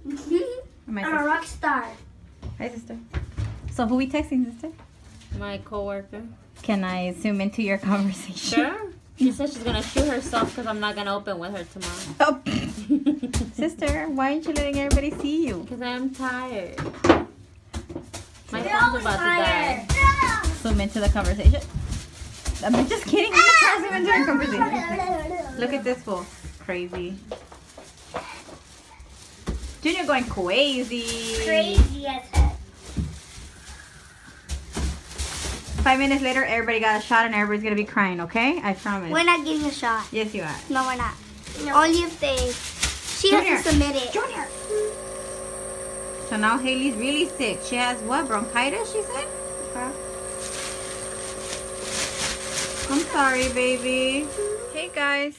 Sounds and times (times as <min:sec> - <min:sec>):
Child speech, kid speaking: 0:00.0 - 0:02.1, 0:05.3 - 0:06.4, 0:08.5 - 0:12.2, 0:18.5 - 0:20.7, 0:23.1 - 0:25.8, 0:31.2 - 0:32.6, 0:39.0 - 0:44.9.